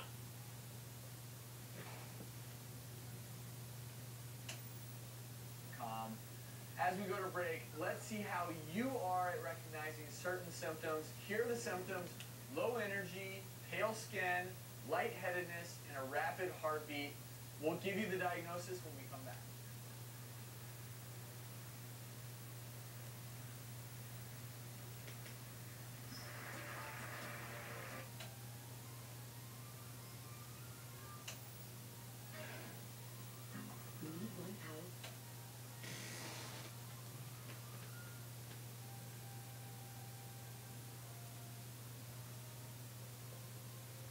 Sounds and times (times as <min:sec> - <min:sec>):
Television: 0:00.0 - 0:44.1
Music: 0:26.0 - 0:44.1.